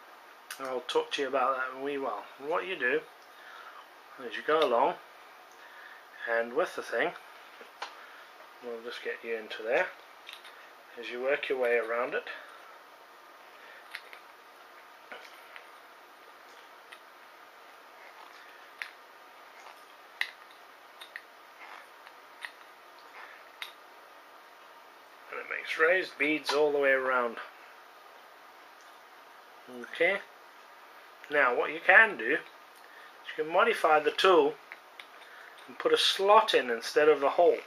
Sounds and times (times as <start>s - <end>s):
Speech: 0.5s - 3.1s, 4.2s - 5.0s, 6.2s - 7.2s, 8.6s - 10.0s, 11.0s - 12.5s, 25.3s - 27.6s, 29.7s - 30.3s, 31.3s - 32.5s, 33.2s - 34.6s, 35.7s - 37.6s.